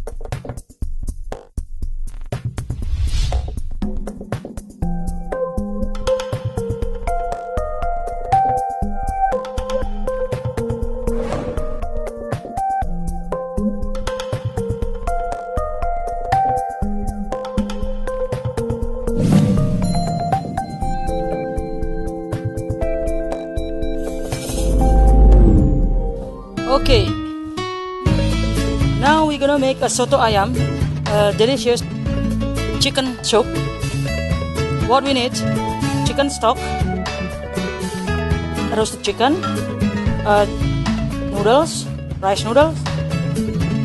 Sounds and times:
Music: 0.0s - 43.8s
Speech: 26.6s - 27.2s, 29.0s - 31.8s, 32.8s - 33.5s, 34.8s - 36.7s, 38.7s - 39.4s, 40.3s - 40.6s, 41.3s - 42.8s.

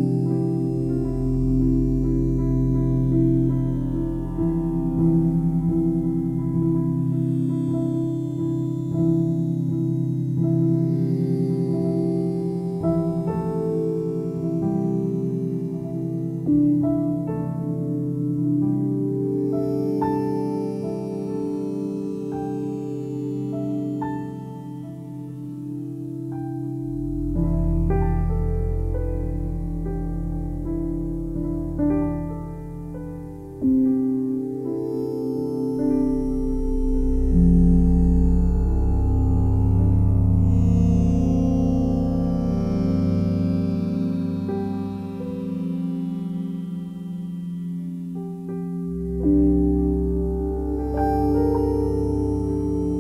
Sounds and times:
Music: 0.0s - 53.0s.

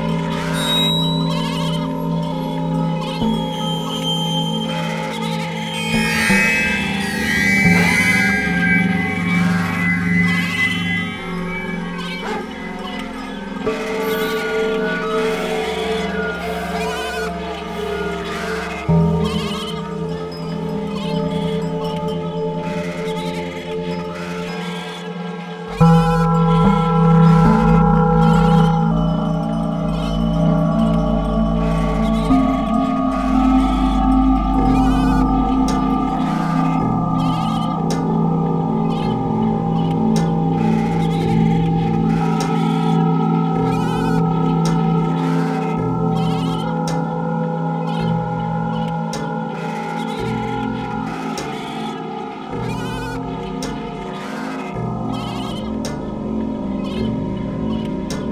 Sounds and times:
Singing bowl: 0.0s - 58.3s.

